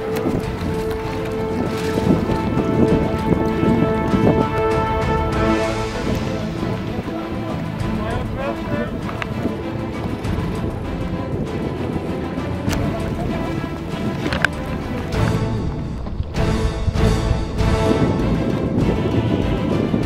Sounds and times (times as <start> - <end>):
Music: 0.0 - 20.0
Rowboat, canoe, kayak: 0.0 - 20.0
Speech: 7.2 - 9.0.